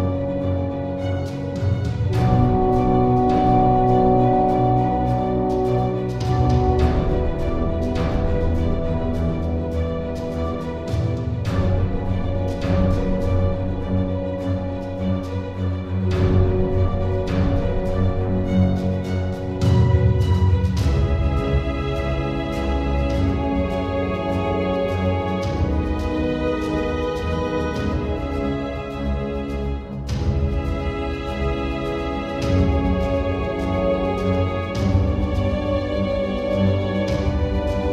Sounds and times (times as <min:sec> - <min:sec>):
Music: 0:00.0 - 0:37.9.